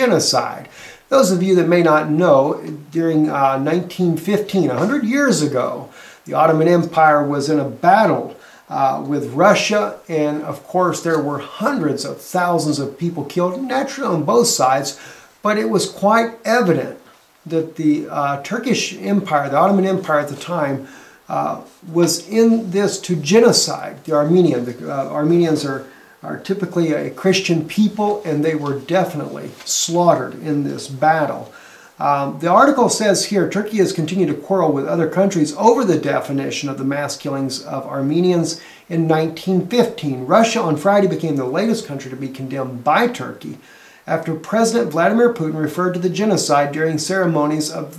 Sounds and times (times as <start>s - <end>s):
Speech: 0.0s - 47.9s.